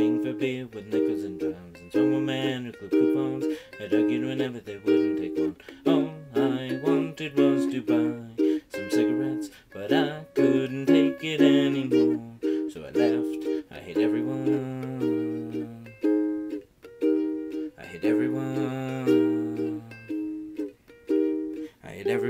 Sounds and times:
Ukulele: 0.0s - 22.3s.

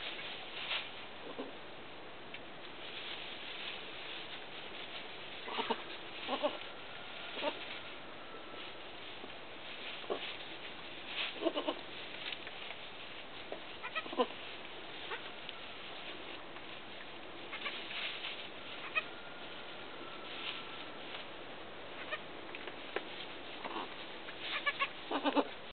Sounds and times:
Bleat: 5.5s - 6.7s, 7.3s - 7.6s, 11.4s - 11.8s, 13.8s - 14.4s, 17.5s - 17.9s, 18.8s - 19.1s, 22.0s - 22.3s, 23.6s - 25.6s.

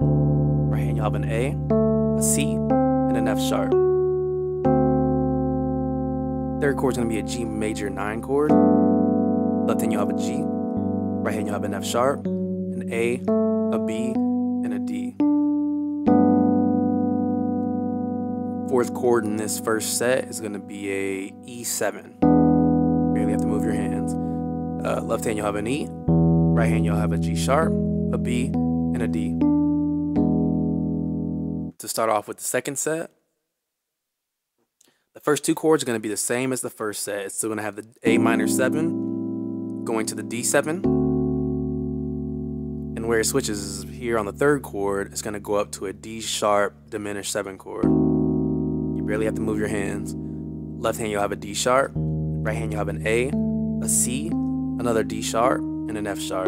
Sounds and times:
Piano: 0.0s - 31.8s, 47.8s - 56.4s
Speech: 0.7s - 1.6s, 2.2s - 3.8s, 6.6s - 8.6s, 9.7s - 10.5s, 11.2s - 12.2s, 12.8s - 15.2s, 18.7s - 22.2s, 23.2s - 24.2s, 24.8s - 26.0s, 26.6s - 29.4s, 31.8s - 33.2s, 35.2s - 39.0s, 39.9s - 40.9s, 43.0s - 48.0s, 49.0s - 50.2s, 50.8s - 56.4s.

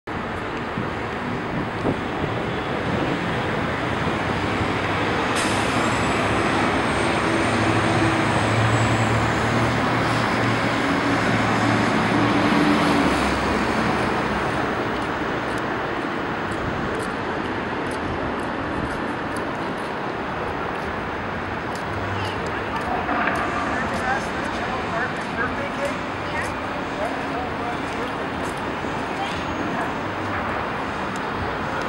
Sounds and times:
Traffic noise, roadway noise: 0.1s - 31.8s.

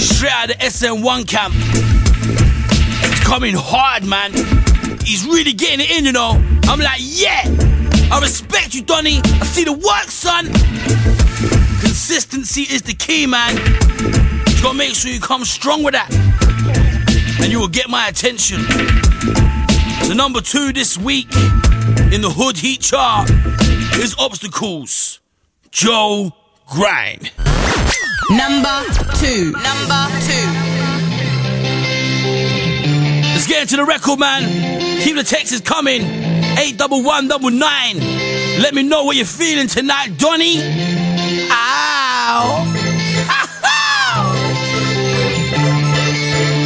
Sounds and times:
Speech: 0.0s - 1.6s, 3.2s - 4.4s, 5.0s - 7.5s, 8.1s - 10.6s, 11.8s - 13.6s, 14.5s - 16.2s, 17.4s - 18.6s, 20.0s - 21.4s, 22.1s - 23.3s, 24.0s - 27.4s, 28.3s - 30.7s, 33.4s - 38.0s, 38.6s - 40.7s, 41.5s - 42.7s
Music: 0.0s - 24.2s, 27.5s - 46.6s.

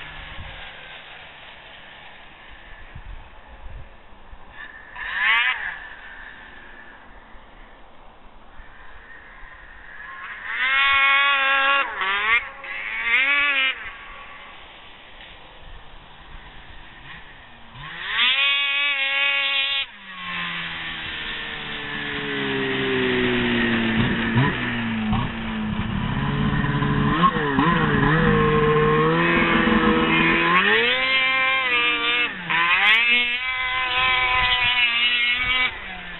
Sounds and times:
Vehicle: 0.0s - 36.1s.

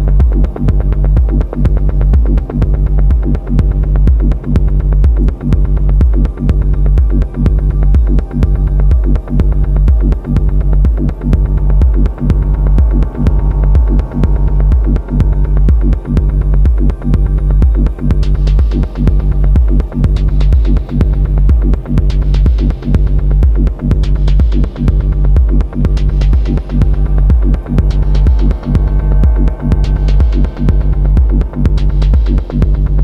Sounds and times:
Music: 0.0s - 33.0s.

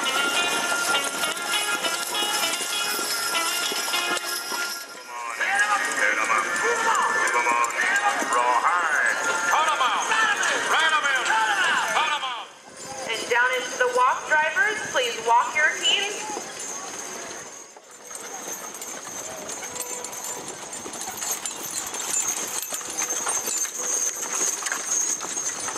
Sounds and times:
Clip-clop: 0.0s - 25.7s
Speech: 5.1s - 16.4s.

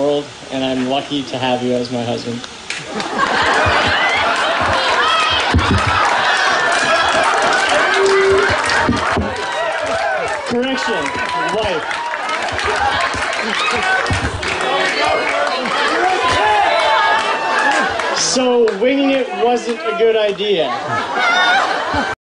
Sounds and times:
Male speech, man speaking: 0.0s - 2.4s, 10.5s - 11.8s, 18.2s - 20.8s.

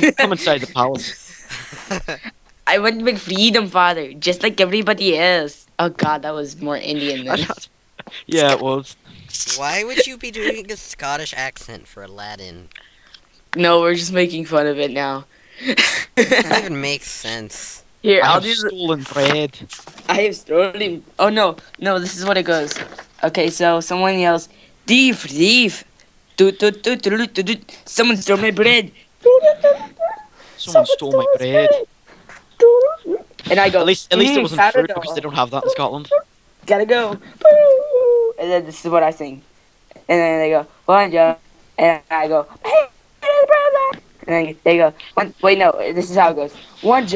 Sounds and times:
Speech: 6.0s - 7.7s, 8.3s - 12.7s, 16.3s - 19.7s.

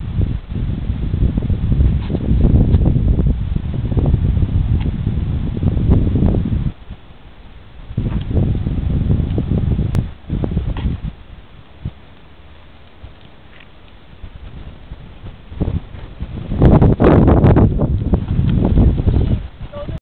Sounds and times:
Clip-clop: 0.0s - 5.3s, 7.9s - 20.0s
Speech: 19.7s - 20.0s.

